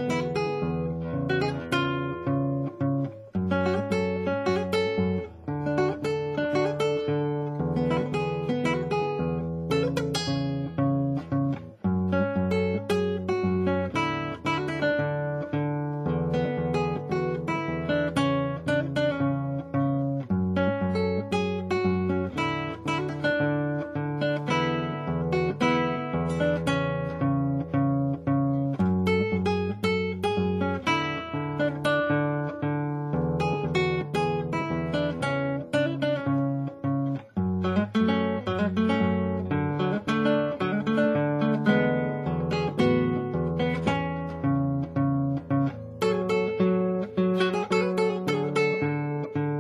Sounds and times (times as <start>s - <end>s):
Guitar: 0.0s - 49.6s.